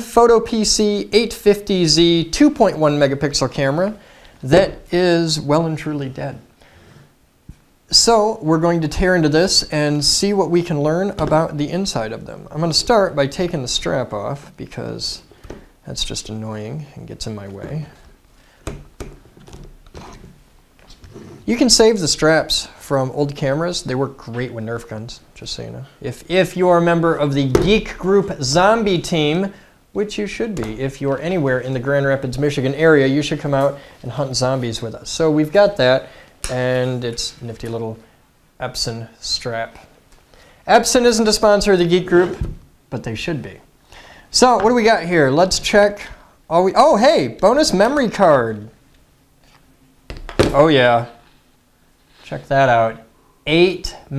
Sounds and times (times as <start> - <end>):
Speech: 0.0 - 6.5, 7.9 - 18.1, 21.4 - 38.0, 38.6 - 39.9, 40.7 - 43.7, 44.3 - 48.8, 50.4 - 51.2, 52.2 - 54.1.